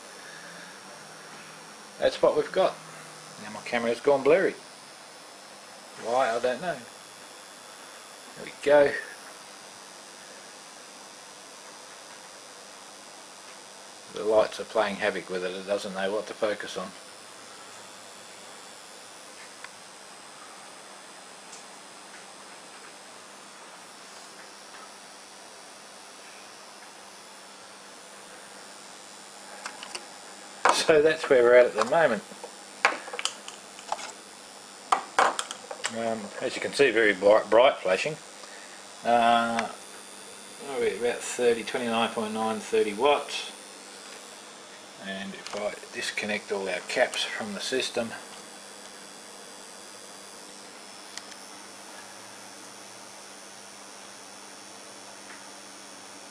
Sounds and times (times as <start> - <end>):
Speech: 2.0 - 2.8, 3.4 - 4.6, 6.0 - 6.9, 8.3 - 9.2, 14.1 - 17.0, 30.7 - 32.3, 35.9 - 38.2, 39.0 - 39.8, 40.6 - 43.6, 45.0 - 48.2.